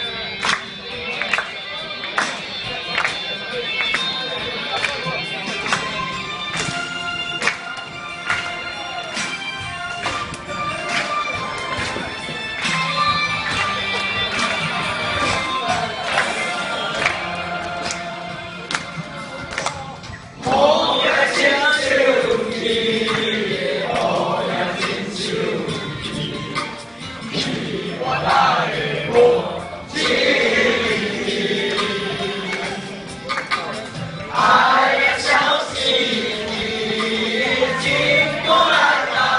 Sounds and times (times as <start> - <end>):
Choir: 14.4 - 19.3, 20.4 - 33.1, 34.3 - 39.3
Male singing: 20.4 - 26.7, 27.4 - 33.0, 34.4 - 39.3.